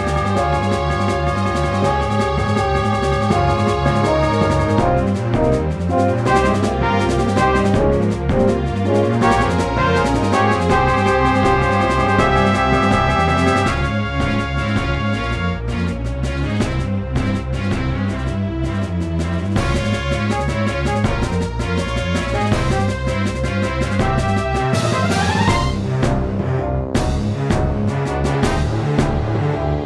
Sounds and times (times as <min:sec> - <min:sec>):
Jazz: 0:00.0 - 0:29.8.